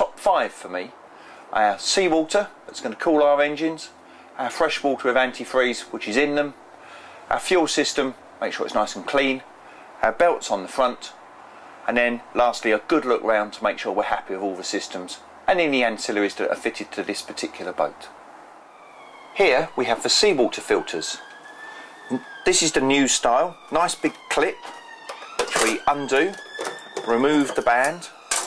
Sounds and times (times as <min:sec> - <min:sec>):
Speech: 0:00.0 - 0:06.6, 0:07.3 - 0:11.2, 0:11.9 - 0:18.2, 0:19.4 - 0:21.2, 0:22.1 - 0:24.7, 0:25.5 - 0:26.4, 0:27.0 - 0:28.2.